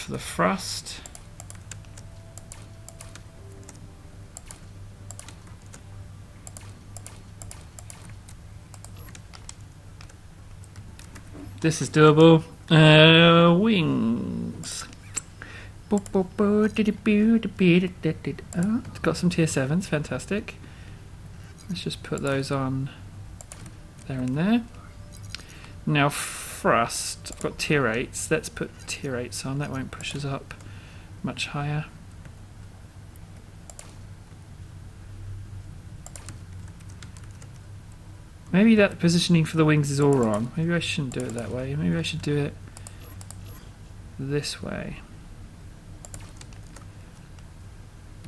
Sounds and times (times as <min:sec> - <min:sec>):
Speech: 0:00.0 - 0:01.1, 0:11.6 - 0:15.0, 0:15.9 - 0:20.6, 0:21.7 - 0:23.0, 0:25.9 - 0:30.6, 0:31.2 - 0:32.0, 0:38.5 - 0:42.6, 0:44.2 - 0:45.1.